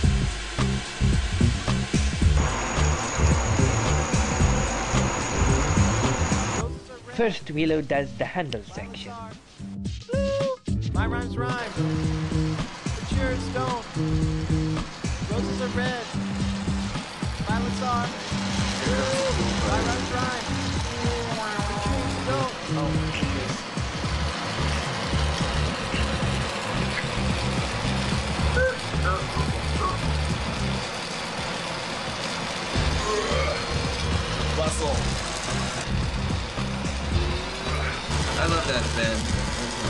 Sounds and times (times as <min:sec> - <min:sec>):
Music: 0:00.0 - 0:39.8
Speech: 0:06.6 - 0:09.4, 0:10.1 - 0:11.8, 0:13.0 - 0:13.9, 0:15.3 - 0:16.1, 0:17.4 - 0:18.1, 0:34.6 - 0:35.0, 0:37.7 - 0:39.3.